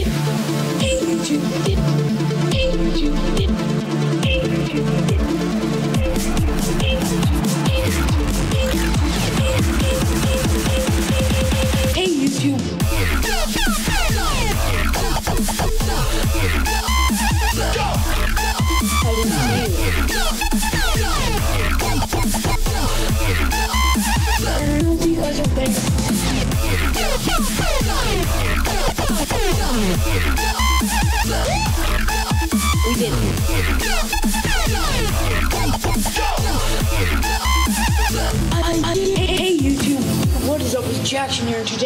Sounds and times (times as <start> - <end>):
Dubstep: 0.0 - 41.8
Speech: 12.0 - 12.8, 19.0 - 20.0, 24.6 - 26.0, 32.8 - 33.3, 38.5 - 41.8.